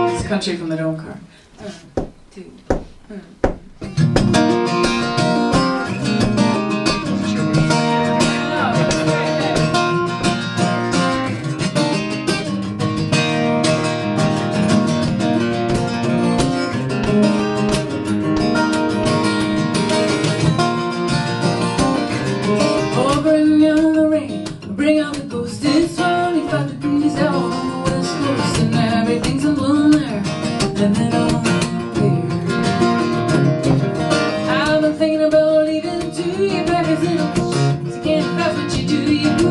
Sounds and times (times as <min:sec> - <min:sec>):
Country: 0:03.8 - 0:39.5.